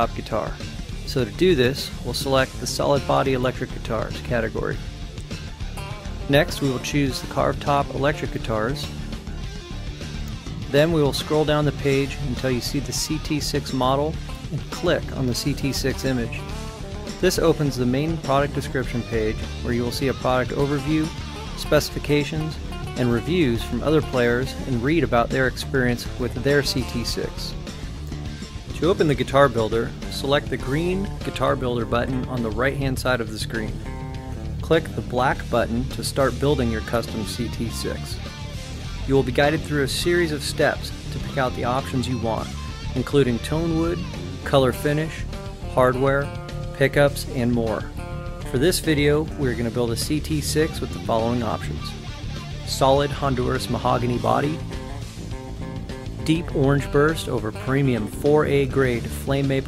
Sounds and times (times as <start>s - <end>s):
Speech: 0.0s - 4.8s, 6.3s - 9.0s, 10.6s - 16.5s, 17.2s - 27.6s, 28.7s - 33.8s, 34.6s - 38.2s, 39.1s - 47.9s, 48.5s - 52.0s, 52.6s - 54.6s, 56.2s - 59.6s
Guitar: 0.0s - 59.6s.